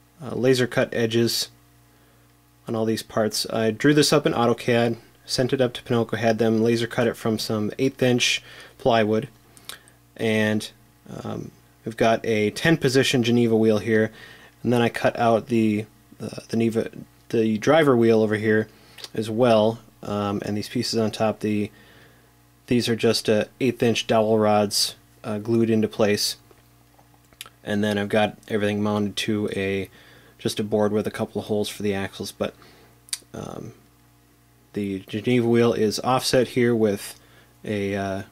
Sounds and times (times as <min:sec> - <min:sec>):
Speech: 0:00.2 - 0:01.6, 0:02.6 - 0:09.4, 0:10.2 - 0:21.8, 0:22.7 - 0:26.4, 0:27.6 - 0:32.6, 0:33.2 - 0:33.8, 0:34.7 - 0:38.3.